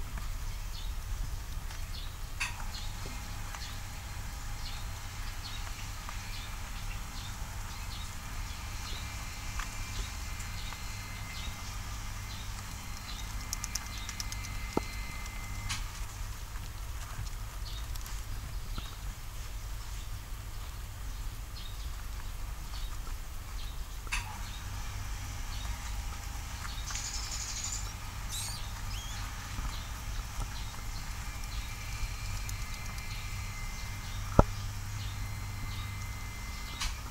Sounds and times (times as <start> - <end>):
Patter: 0.1 - 37.1.